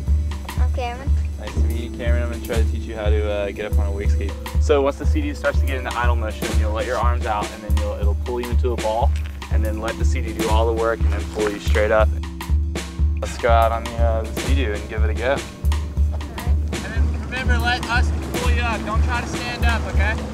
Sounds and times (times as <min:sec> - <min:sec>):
Music: 0:00.0 - 0:20.3
Speech: 0:00.5 - 0:12.2, 0:13.2 - 0:15.4, 0:16.3 - 0:20.2.